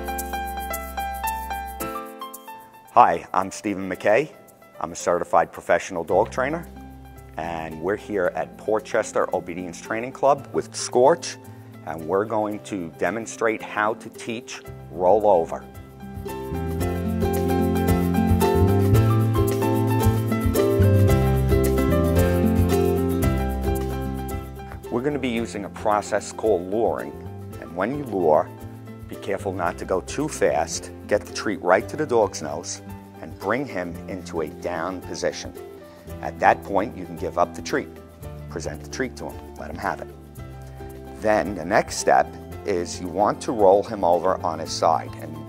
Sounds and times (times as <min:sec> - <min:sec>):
Music: 0:00.0 - 0:45.4
Speech: 0:03.0 - 0:06.6, 0:07.4 - 0:15.6, 0:24.9 - 0:28.5, 0:29.1 - 0:35.6, 0:36.2 - 0:37.9, 0:38.5 - 0:40.1, 0:41.2 - 0:45.4.